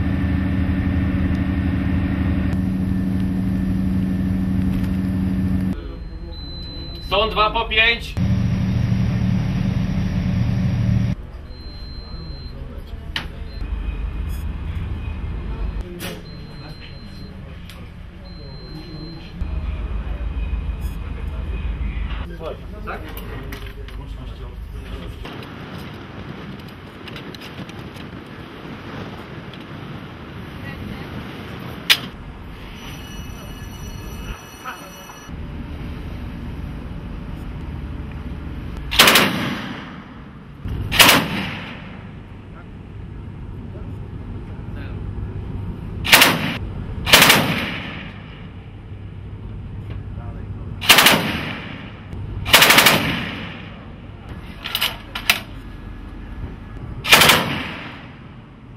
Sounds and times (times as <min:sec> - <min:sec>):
Vehicle: 0:00.0 - 0:58.7.